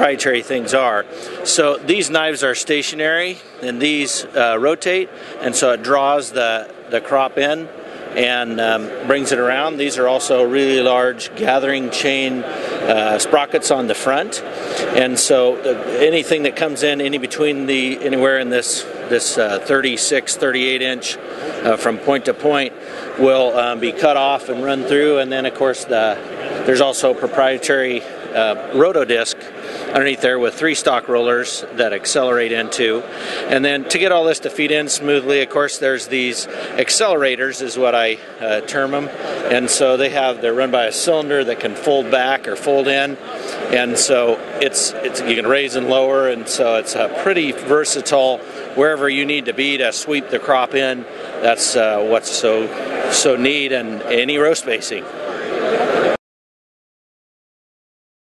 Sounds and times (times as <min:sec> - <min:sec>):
Speech: 0:00.0 - 0:56.2.